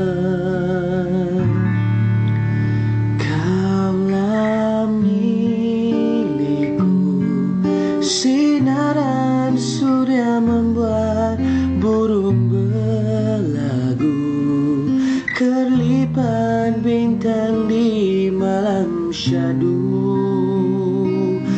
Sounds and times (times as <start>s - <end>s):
Music: 0.0s - 21.5s.